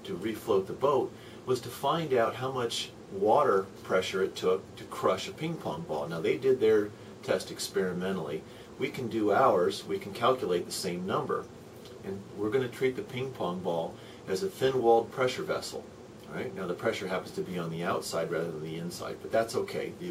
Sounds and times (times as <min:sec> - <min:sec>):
Speech: 0:00.0 - 0:20.1.